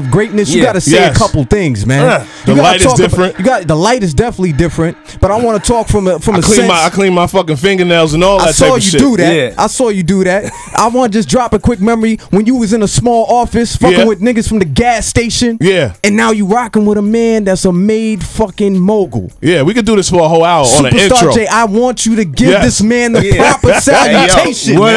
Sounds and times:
Speech: 0:00.0 - 0:24.9.

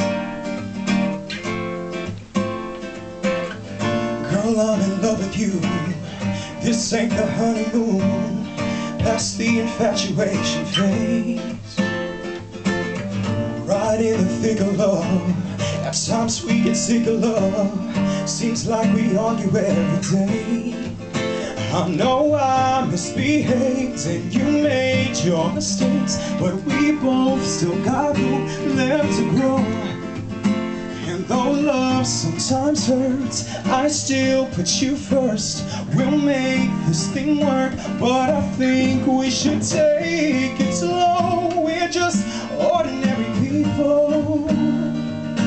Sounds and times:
Music: 0:00.0 - 0:45.4
Male singing: 0:04.2 - 0:11.9, 0:13.7 - 0:30.0, 0:31.0 - 0:45.4.

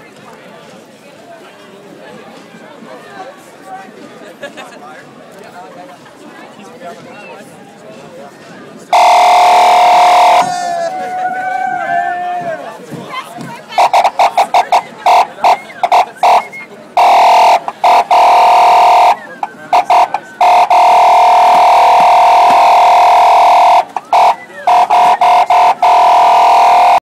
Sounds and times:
Speech: 0:00.0 - 0:09.0, 0:09.8 - 0:20.7, 0:23.8 - 0:25.6.

